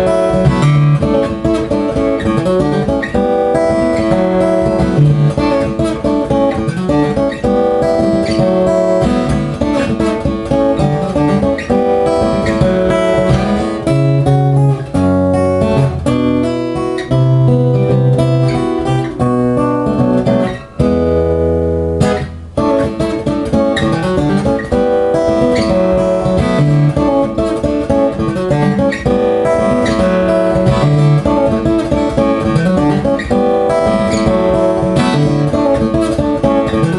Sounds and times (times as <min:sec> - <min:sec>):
Acoustic guitar: 0:00.0 - 0:36.9
Strum: 0:00.0 - 0:36.9.